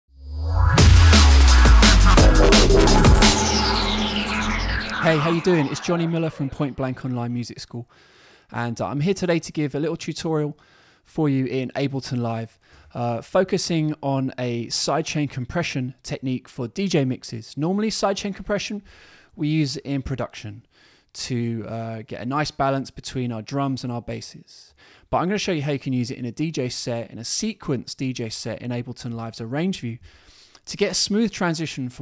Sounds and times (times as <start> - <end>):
Drum and bass: 0.4 - 7.0
Speech: 4.9 - 7.9, 8.5 - 20.6, 21.2 - 30.0, 30.6 - 32.0.